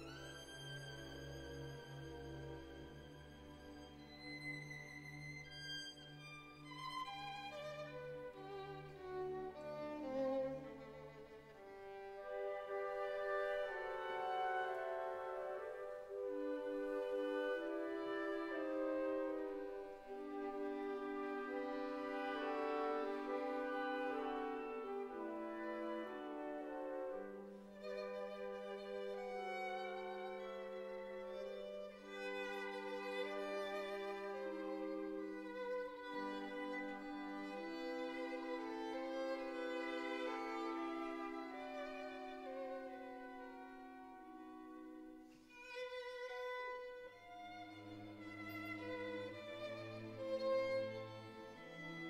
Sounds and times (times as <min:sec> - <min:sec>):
Violin, fiddle: 0:00.0 - 0:52.0.